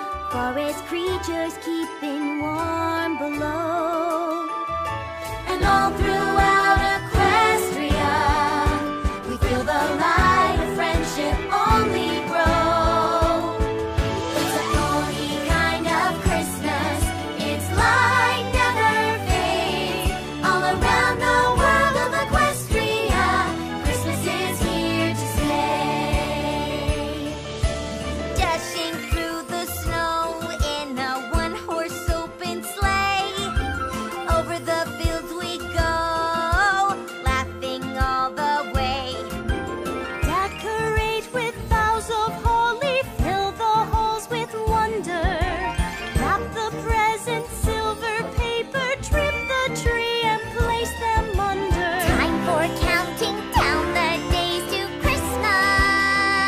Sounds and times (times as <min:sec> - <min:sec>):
Music: 0:00.0 - 0:56.4.